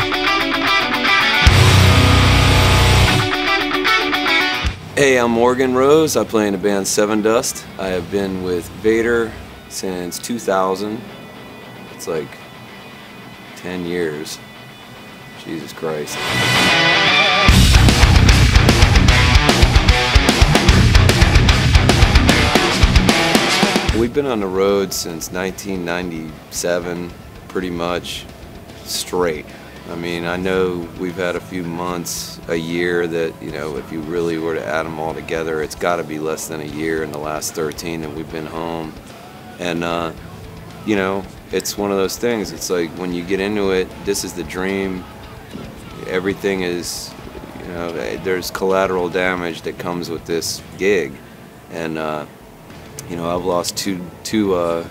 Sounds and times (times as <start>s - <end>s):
Music: 0.0s - 54.9s
Speech: 5.0s - 11.0s, 12.0s - 12.4s, 13.6s - 14.4s, 15.4s - 16.2s, 24.0s - 39.0s, 39.6s - 52.3s, 53.0s - 54.9s.